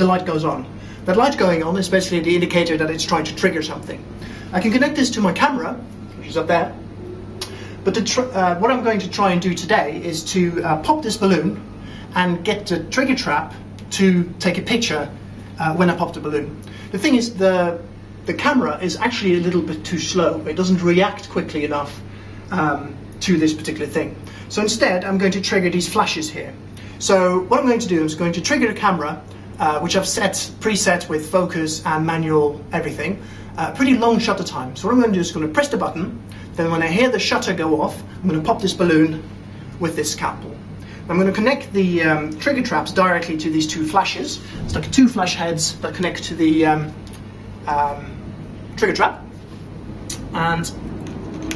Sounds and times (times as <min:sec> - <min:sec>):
Speech: 0:00.0 - 0:06.8, 0:07.8 - 0:47.0, 0:47.6 - 0:48.2, 0:48.8 - 0:49.3, 0:50.1 - 0:50.8.